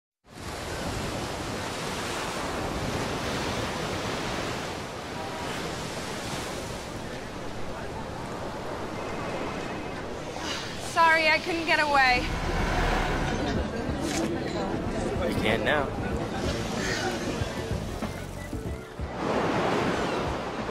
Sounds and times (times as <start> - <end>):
Outside, rural or natural: 0.2 - 20.7.